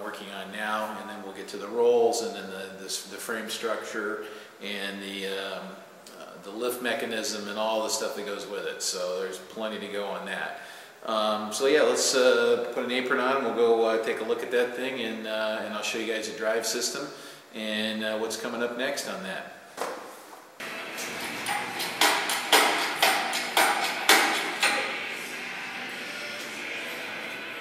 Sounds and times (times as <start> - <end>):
Speech: 0.0 - 19.6.